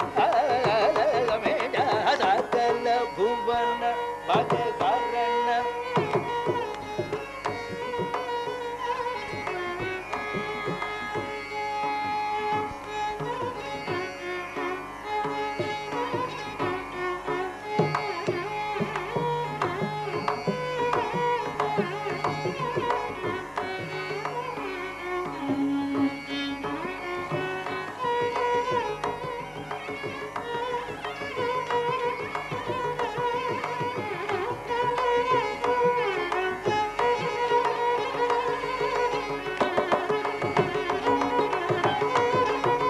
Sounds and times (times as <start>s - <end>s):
Bowed string instrument: 0.0s - 42.9s
Carnatic music: 0.0s - 42.9s
Sitar: 0.0s - 42.9s
Classical music: 24.7s - 27.1s.